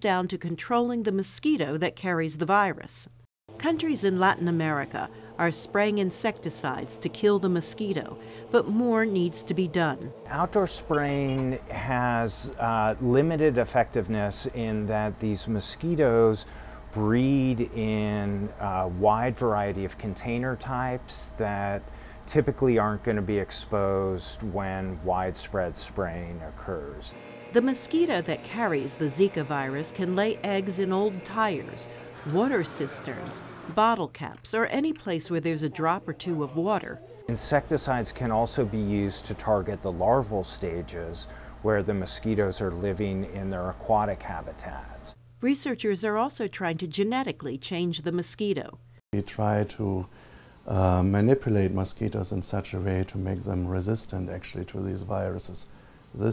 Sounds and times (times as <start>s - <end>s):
Speech: 0.0s - 50.1s, 50.7s - 56.3s.